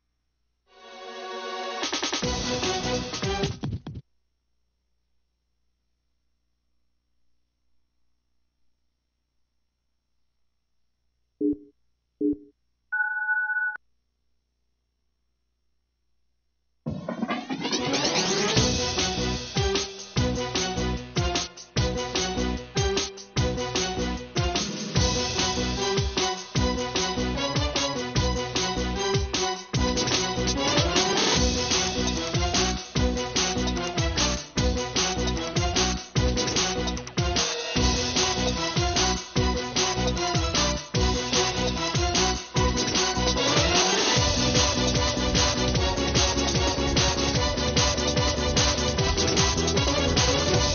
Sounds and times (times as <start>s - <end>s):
Music: 0.7s - 4.0s, 16.9s - 50.7s.